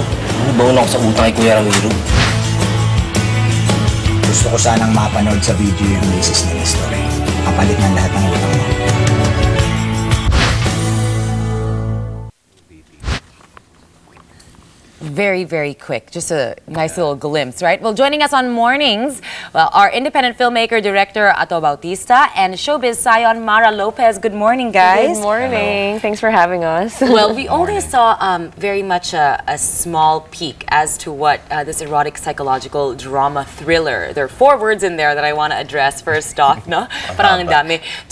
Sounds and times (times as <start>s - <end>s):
Music: 0.0s - 12.3s.